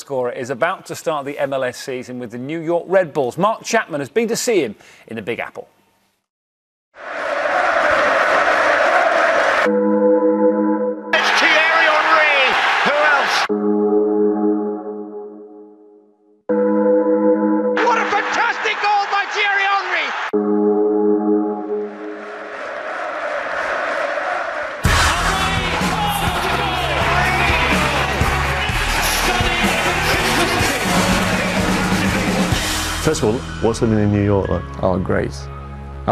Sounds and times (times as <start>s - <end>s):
Speech: 0.0s - 5.7s, 11.2s - 13.5s, 17.8s - 20.2s, 33.1s - 35.5s
Music: 9.4s - 22.7s, 24.8s - 36.1s.